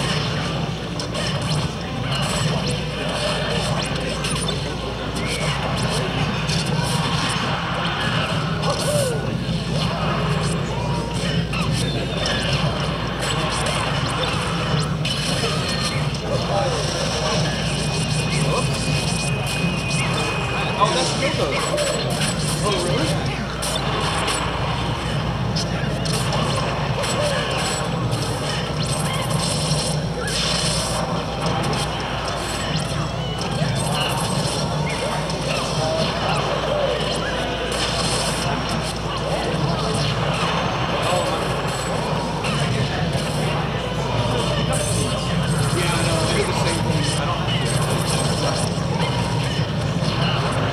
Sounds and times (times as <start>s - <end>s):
Speech: 1.7s - 24.3s, 25.6s - 29.3s, 30.9s - 50.7s.